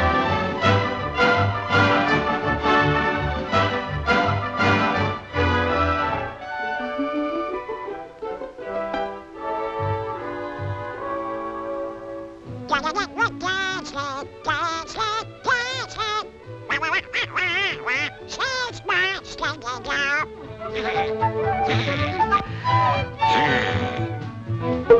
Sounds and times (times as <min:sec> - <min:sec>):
Music: 0:00.0 - 0:24.9
Quack: 0:16.7 - 0:20.9.